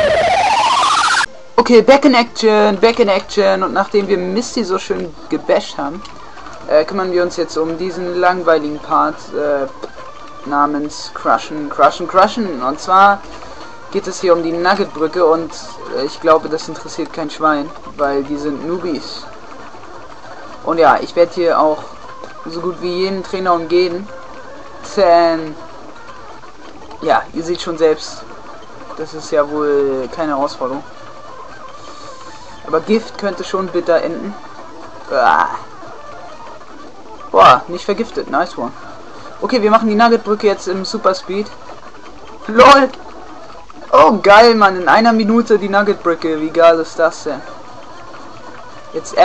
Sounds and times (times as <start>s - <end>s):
Speech: 1.6s - 6.0s, 6.7s - 9.7s, 10.5s - 13.2s, 13.9s - 19.3s, 20.6s - 24.1s, 24.8s - 25.6s, 27.0s - 28.2s, 29.0s - 30.8s, 32.7s - 34.4s, 35.1s - 35.7s, 37.4s - 38.8s, 39.4s - 41.6s, 42.5s - 43.0s, 44.0s - 47.5s, 49.0s - 49.2s.